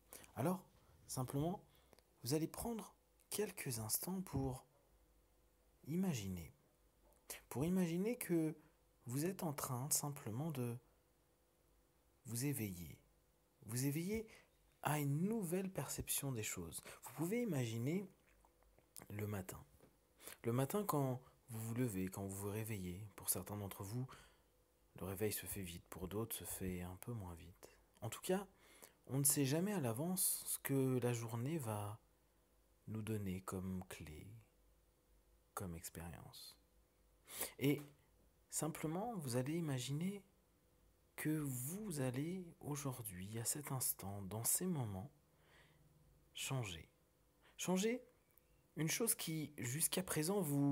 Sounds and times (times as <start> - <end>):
Speech: 0.3 - 4.7, 5.8 - 6.6, 7.3 - 10.8, 12.2 - 18.2, 19.0 - 19.7, 20.3 - 24.2, 25.0 - 32.0, 32.8 - 34.5, 35.6 - 36.6, 37.4 - 40.3, 41.2 - 45.2, 46.4 - 47.0, 47.6 - 48.1, 48.8 - 50.7.